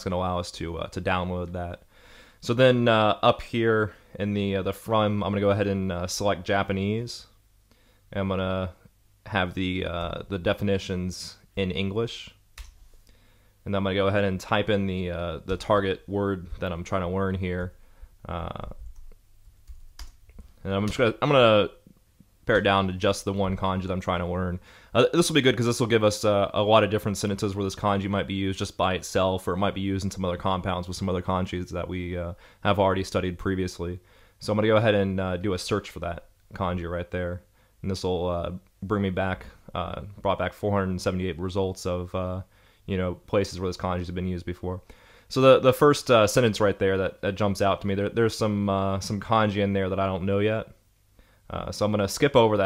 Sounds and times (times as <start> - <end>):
Speech: 0.0 - 1.8, 2.4 - 7.4, 8.1 - 12.4, 13.6 - 18.9, 20.6 - 50.8, 51.5 - 52.6.